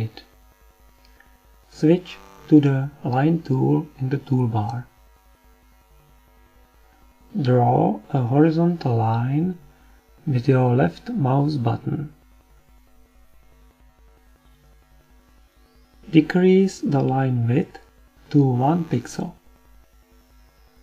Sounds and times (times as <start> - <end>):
Speech: 0.0 - 0.3, 1.7 - 4.9, 7.3 - 9.6, 10.2 - 12.2, 16.1 - 19.4.